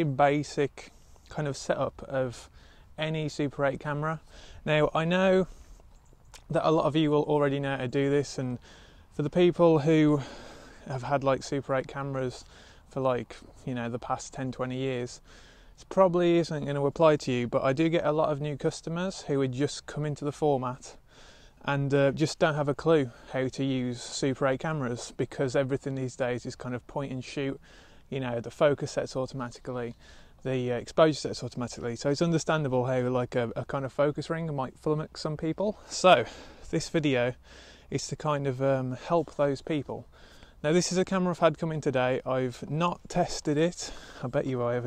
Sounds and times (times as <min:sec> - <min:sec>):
Speech: 0:00.0 - 0:05.5, 0:06.4 - 0:21.0, 0:21.6 - 0:44.8.